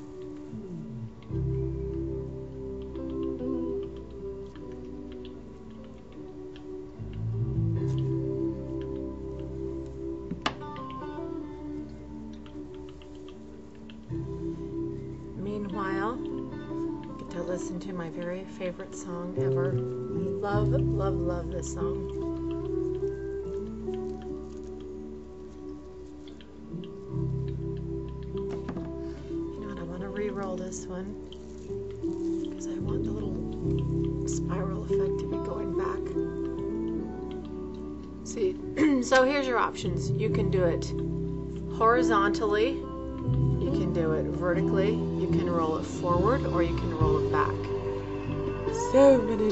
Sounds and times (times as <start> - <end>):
Music: 0.0 - 49.5.